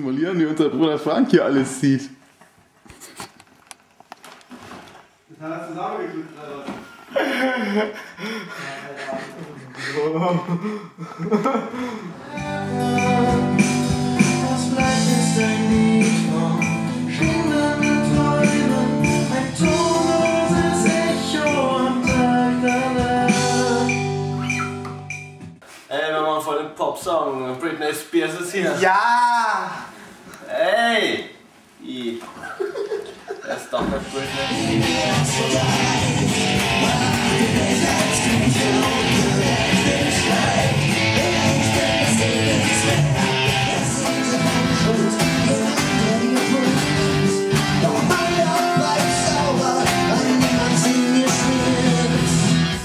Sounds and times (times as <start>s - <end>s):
Music: 12.2s - 25.6s, 33.8s - 52.8s.